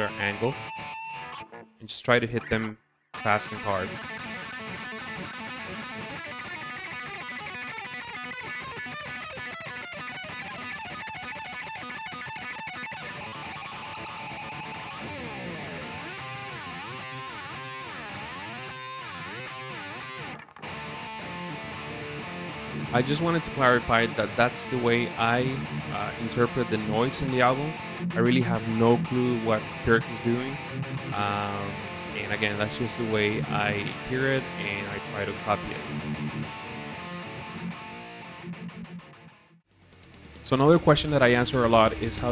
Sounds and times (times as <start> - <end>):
Speech: 0.0 - 0.6, 1.8 - 4.0, 23.0 - 30.6, 31.2 - 35.9, 40.5 - 42.3
Music: 0.0 - 42.3.